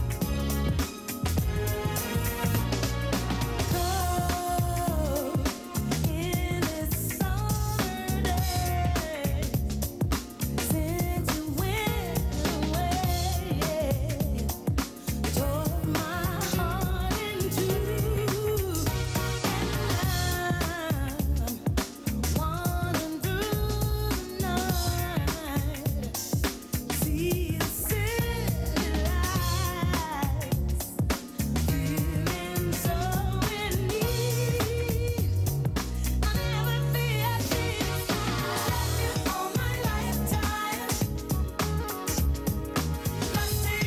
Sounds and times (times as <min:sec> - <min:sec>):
Pop music: 0:00.0 - 0:43.8.